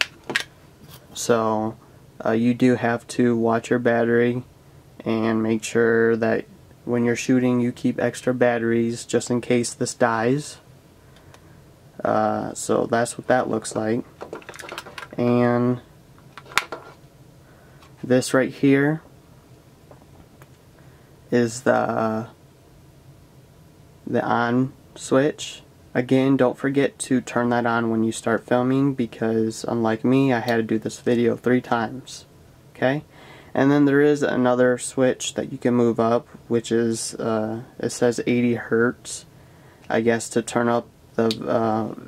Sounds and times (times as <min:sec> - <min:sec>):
Inside, small room: 0:00.0 - 0:42.0
Speech: 0:01.2 - 0:10.6, 0:12.0 - 0:14.1, 0:15.1 - 0:15.9, 0:18.0 - 0:19.0, 0:21.3 - 0:22.4, 0:24.1 - 0:39.3, 0:39.9 - 0:42.0.